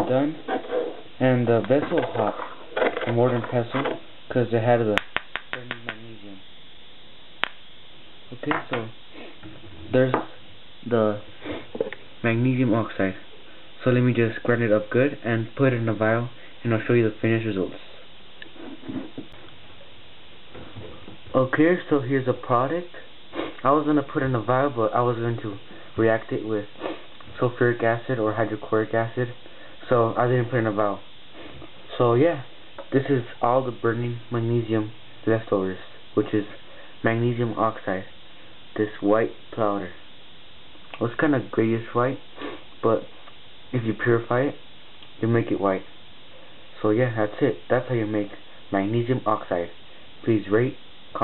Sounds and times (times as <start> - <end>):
Speech: 0.0 - 0.5, 1.2 - 6.4, 8.3 - 9.0, 9.9 - 11.3, 12.2 - 17.9, 21.3 - 26.8, 27.4 - 31.1, 31.9 - 38.2, 38.8 - 40.0, 41.0 - 42.2, 42.8 - 43.1, 43.7 - 44.6, 45.2 - 45.9, 46.8 - 51.2.